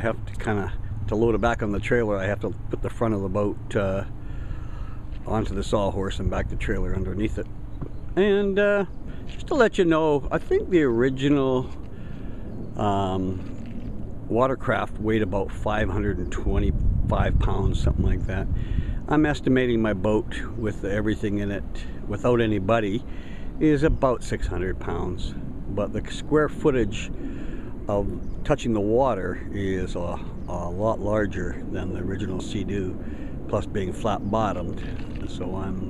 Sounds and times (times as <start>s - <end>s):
Speech: 0.0s - 4.2s, 5.2s - 7.5s, 8.2s - 11.8s, 12.8s - 13.5s, 14.3s - 27.1s, 27.9s - 35.9s.